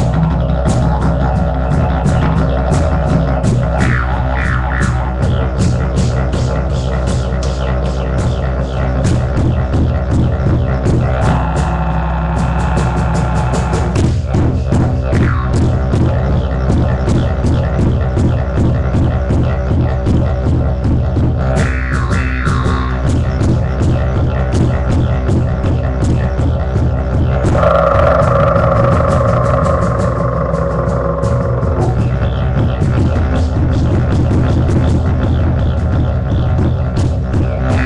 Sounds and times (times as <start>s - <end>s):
Didgeridoo: 0.0s - 37.8s.